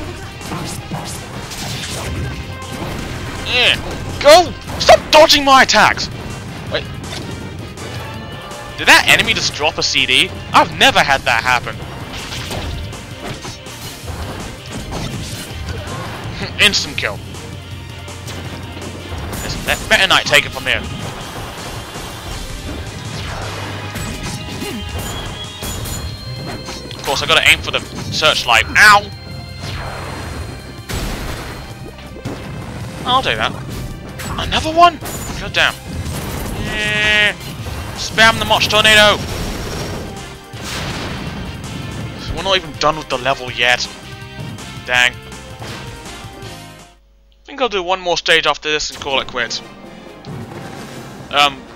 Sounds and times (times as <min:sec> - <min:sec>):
Smash, crash: 0:00.0 - 0:08.1, 0:10.5 - 0:17.4, 0:18.2 - 0:29.0, 0:29.6 - 0:46.0.